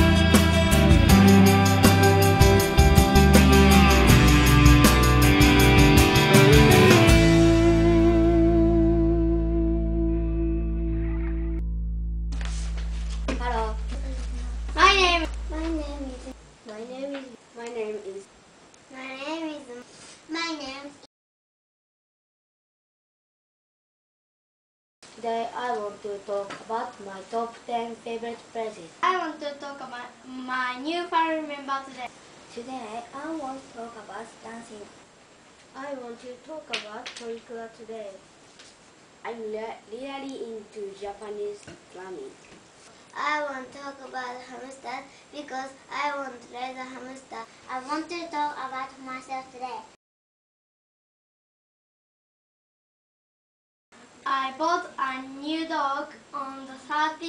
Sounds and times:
Music: 0.0 - 15.7
Speech: 13.3 - 18.3, 18.9 - 21.1, 25.2 - 34.9, 35.8 - 38.2, 39.2 - 42.4, 43.2 - 50.0, 54.2 - 57.2.

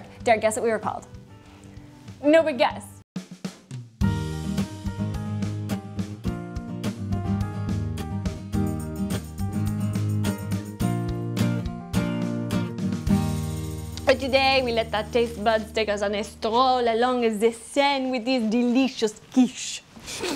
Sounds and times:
Music: 0.0 - 17.5
Speech: 2.2 - 3.0, 14.0 - 19.9.

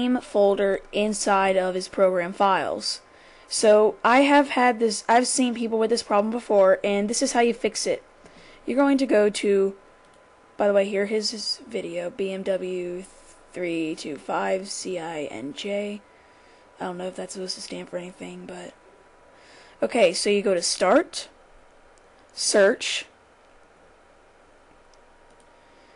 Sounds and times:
Speech: 0.0 - 8.0, 8.7 - 9.8, 10.6 - 16.0, 16.8 - 18.8, 19.8 - 21.4, 22.4 - 23.1.

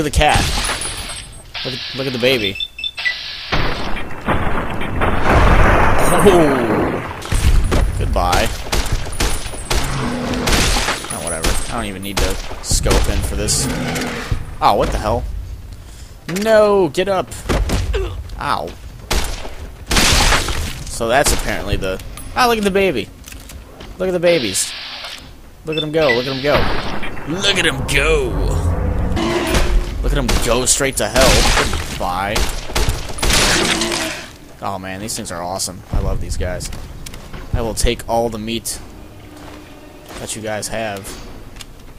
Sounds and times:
Outside, rural or natural: 0.0 - 41.9
Speech: 6.0 - 6.8, 27.3 - 28.7, 34.6 - 36.7.

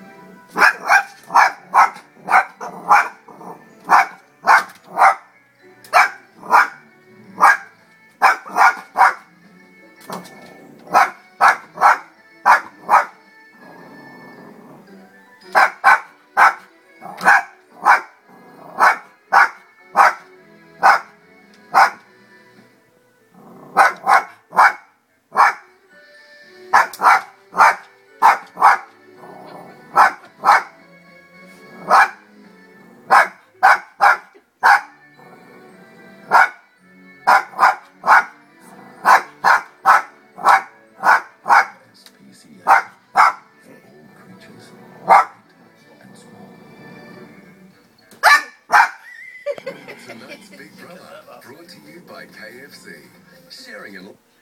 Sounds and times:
Music: 0.0 - 54.4
Bow-wow: 0.6 - 3.2, 3.9 - 5.2, 5.9 - 6.8, 7.4 - 9.2, 10.9 - 13.2, 15.6 - 18.1, 18.8 - 20.2, 20.8 - 21.1, 21.8 - 22.0, 23.7 - 25.6, 26.8 - 28.9, 29.9 - 30.7, 31.8 - 32.2, 33.1 - 34.9, 36.3 - 36.6, 37.3 - 38.3, 39.0 - 41.7, 42.7 - 43.4, 45.0 - 45.4, 48.2 - 49.0.

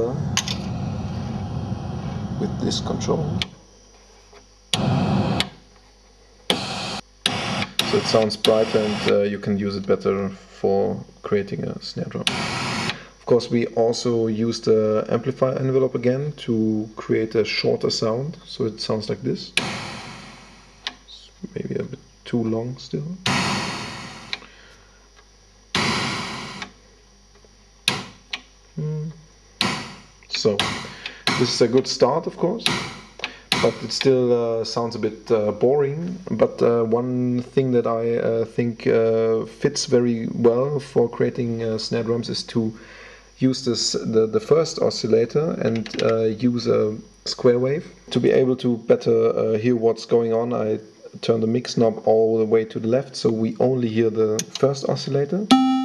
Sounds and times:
Speech: 0.0 - 0.3, 2.4 - 3.6, 7.8 - 12.3, 13.2 - 19.6, 21.1 - 23.3, 28.8 - 29.3, 30.3 - 32.8, 33.6 - 42.8, 43.4 - 55.5.

